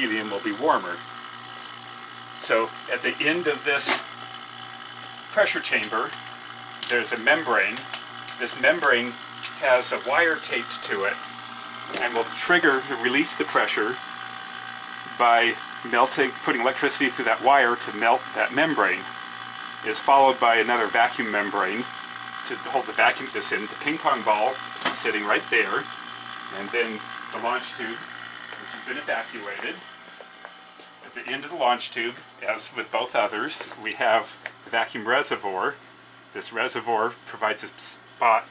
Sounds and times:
Speech: 0.0s - 1.0s, 2.4s - 4.0s, 5.3s - 6.2s, 6.9s - 11.2s, 12.0s - 14.0s, 15.2s - 19.1s, 19.8s - 25.9s, 26.5s - 29.8s, 31.1s - 35.8s, 36.4s - 38.5s.

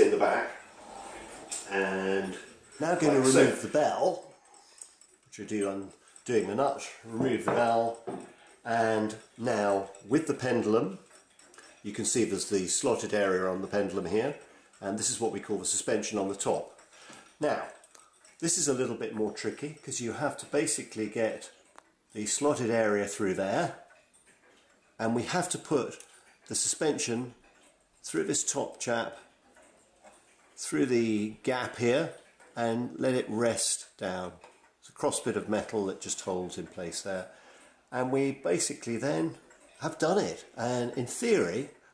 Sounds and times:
Speech: 0.0s - 0.6s, 1.7s - 4.3s, 5.3s - 8.0s, 8.7s - 11.0s, 11.8s - 16.7s, 17.4s - 17.8s, 18.4s - 21.6s, 22.2s - 23.8s, 25.0s - 27.4s, 28.0s - 29.2s, 30.6s - 37.3s, 37.9s - 41.8s.

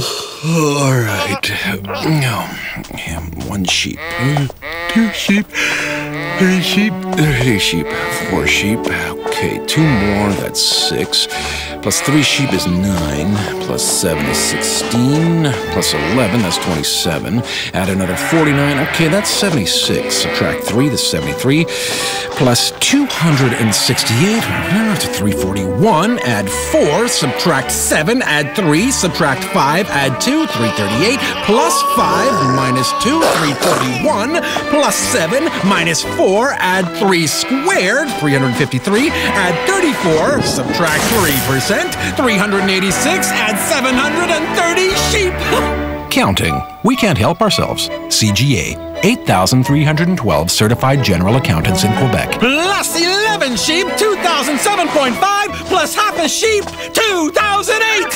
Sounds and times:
Speech: 0.4s - 5.5s, 6.3s - 58.1s
Music: 0.9s - 58.1s
Bleat: 4.0s - 5.3s, 5.9s - 6.6s, 7.3s - 8.5s, 9.8s - 10.3s, 11.9s - 12.5s, 14.1s - 16.8s, 17.9s - 20.6s, 22.9s - 25.1s, 26.9s - 27.6s, 28.3s - 34.4s, 53.9s - 55.1s.

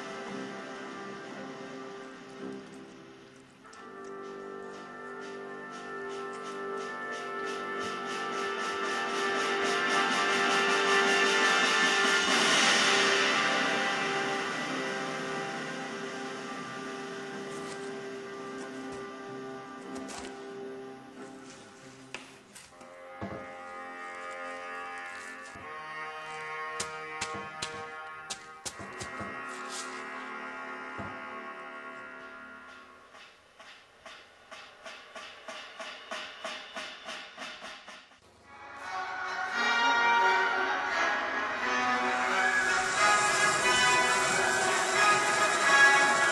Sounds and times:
Music: 0.0s - 46.3s.

